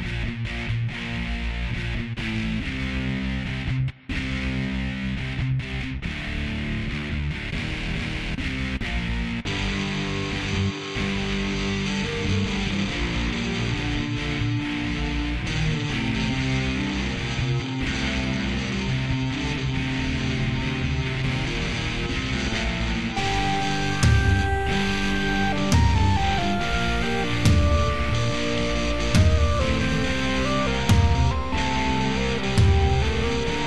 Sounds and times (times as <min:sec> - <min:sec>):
Music: 0:00.0 - 0:33.6.